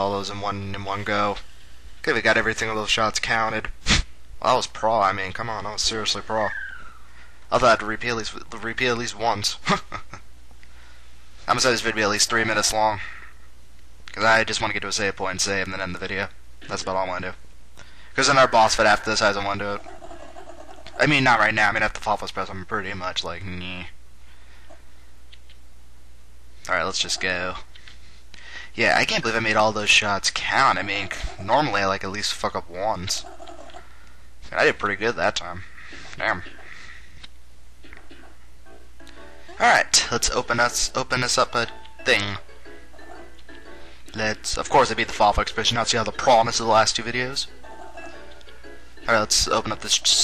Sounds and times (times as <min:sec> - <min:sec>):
Speech: 0:00.0 - 0:01.4, 0:02.0 - 0:03.7, 0:04.4 - 0:06.6, 0:07.5 - 0:09.8, 0:11.5 - 0:13.1, 0:14.1 - 0:17.4, 0:18.2 - 0:19.8, 0:21.0 - 0:24.0, 0:26.7 - 0:27.7, 0:28.8 - 0:33.3, 0:34.5 - 0:36.6, 0:39.6 - 0:42.4, 0:44.1 - 0:47.5, 0:49.1 - 0:50.2.